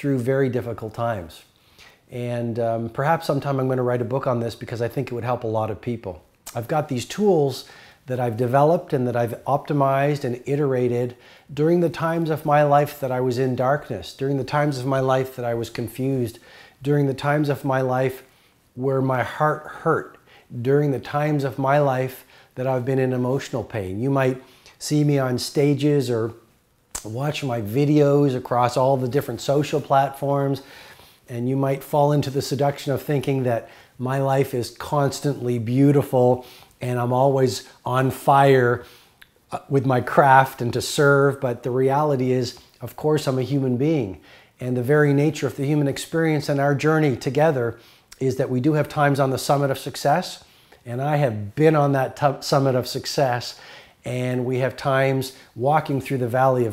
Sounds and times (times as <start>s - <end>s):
Speech: 0.0s - 1.5s, 2.1s - 26.4s, 27.0s - 30.7s, 31.3s - 38.8s, 39.5s - 56.7s.